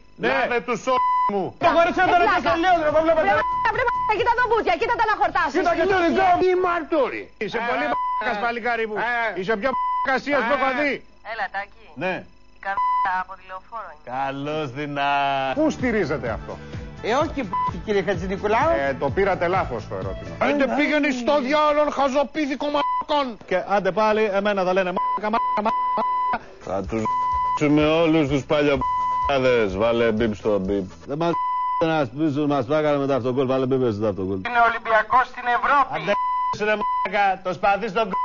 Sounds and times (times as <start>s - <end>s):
Beep, bleep: 3.2s - 4.3s, 7.7s - 8.4s, 9.7s - 10.3s, 12.8s - 13.0s, 17.5s - 17.8s, 25.0s - 26.4s, 27.0s - 27.7s, 28.8s - 29.5s, 31.3s - 31.9s, 36.1s - 37.2s.